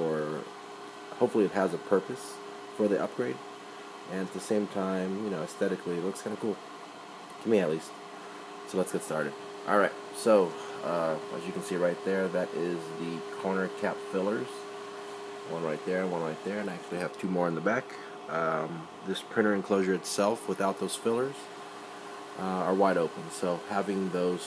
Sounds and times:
Speech: 0.0 - 0.5, 1.2 - 3.4, 4.1 - 6.6, 7.4 - 8.0, 8.7 - 14.7, 15.5 - 21.5, 22.4 - 24.4.

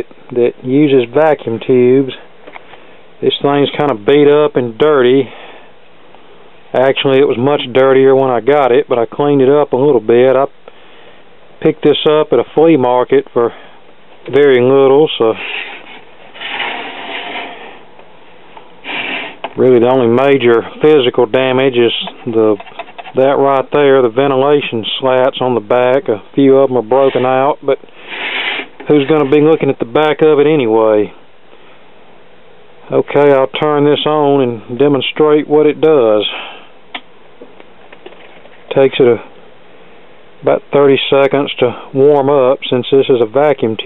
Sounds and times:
Speech: 0.0 - 2.3, 3.2 - 5.4, 6.7 - 10.5, 11.6 - 13.6, 14.3 - 15.4, 19.6 - 27.8, 28.8 - 31.2, 32.9 - 36.5, 38.7 - 39.3, 40.4 - 43.8.

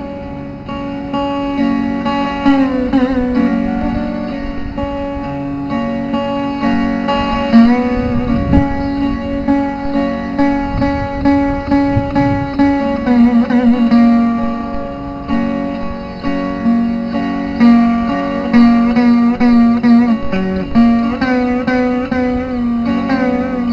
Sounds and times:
Guitar: 0.0 - 23.7.

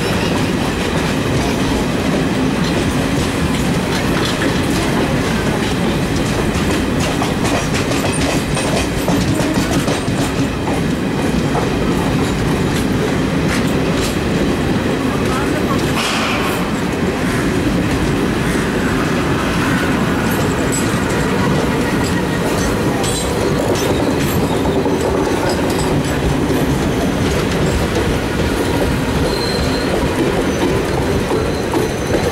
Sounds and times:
Railroad car, train wagon: 0.0 - 32.3
Train: 0.0 - 32.3.

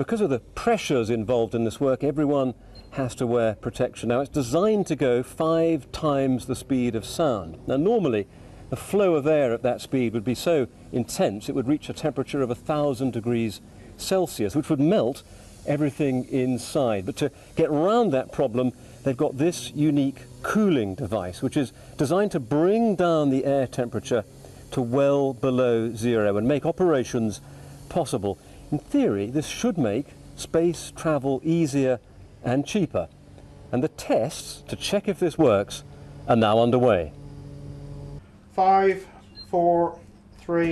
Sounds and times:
Speech: 0.0 - 33.1, 33.8 - 37.2, 38.6 - 40.7.

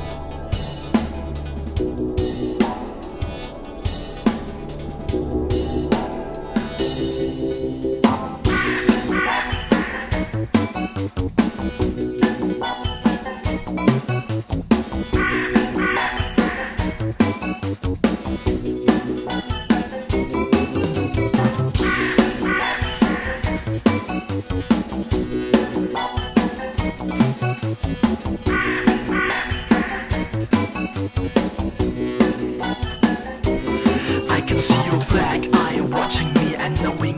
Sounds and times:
Drum: 0.0 - 37.1
Drum kit: 0.0 - 37.1.

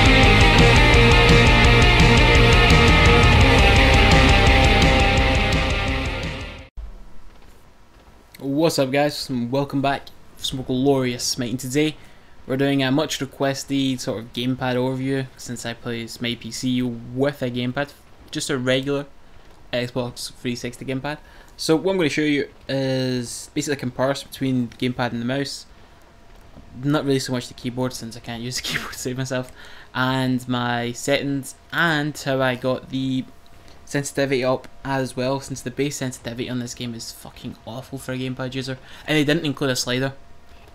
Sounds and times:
Speech: 8.4 - 25.7, 26.7 - 33.3, 33.9 - 40.2.

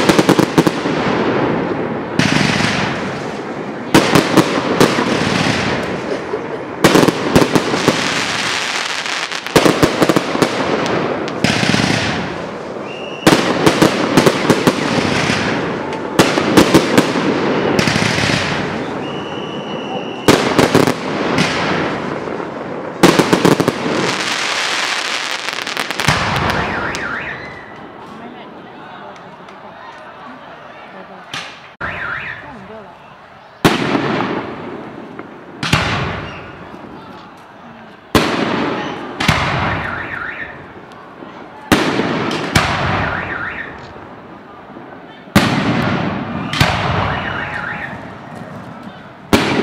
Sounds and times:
Firecracker: 0.0 - 30.2, 31.0 - 49.6.

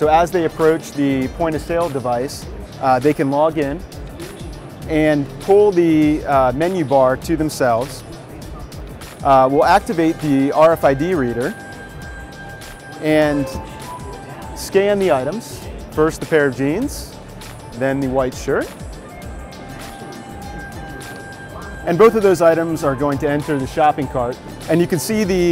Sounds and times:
Music: 0.0 - 25.5.

